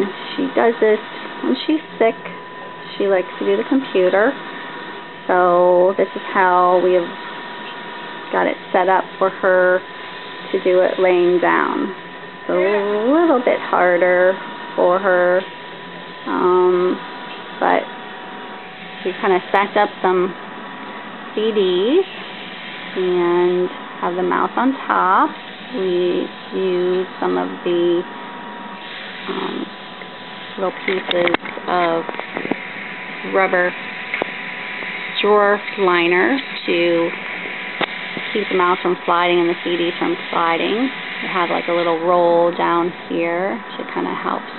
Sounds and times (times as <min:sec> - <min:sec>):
Speech: 0:00.0 - 0:04.4, 0:05.3 - 0:07.2, 0:08.3 - 0:09.9, 0:10.5 - 0:15.5, 0:16.3 - 0:17.0, 0:17.6 - 0:17.9, 0:19.1 - 0:20.4, 0:21.4 - 0:22.1, 0:23.0 - 0:28.1, 0:29.2 - 0:29.7, 0:30.6 - 0:32.6, 0:33.2 - 0:33.8, 0:35.2 - 0:37.2, 0:38.2 - 0:44.5.